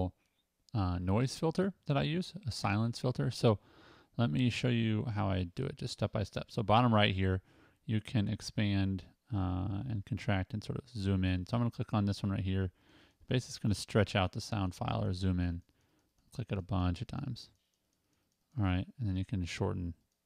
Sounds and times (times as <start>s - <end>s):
Speech: 0.0s - 3.6s, 4.2s - 15.7s, 16.3s - 17.6s, 18.6s - 20.0s.